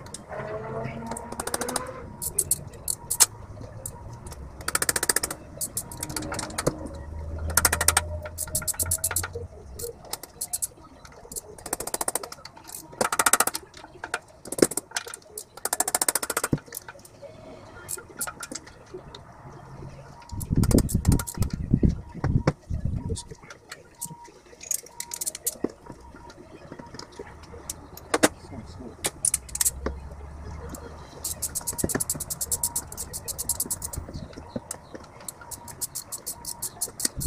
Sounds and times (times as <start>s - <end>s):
Vehicle: 0.0s - 37.2s.